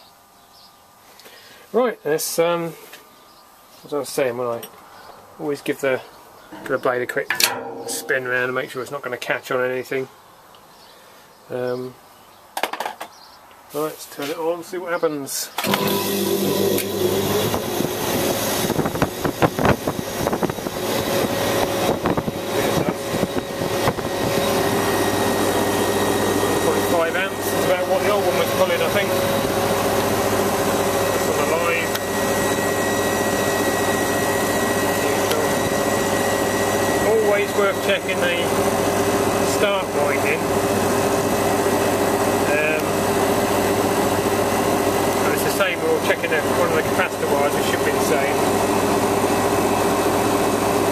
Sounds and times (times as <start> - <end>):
Speech: 1.7 - 2.8, 3.8 - 4.7, 5.4 - 10.1, 11.5 - 12.0, 13.7 - 15.6, 22.6 - 23.0, 26.6 - 29.2, 31.2 - 32.0, 35.0 - 35.6, 37.0 - 38.6, 39.4 - 40.5, 42.4 - 43.0, 45.2 - 48.5
Mechanical fan: 13.1 - 50.9.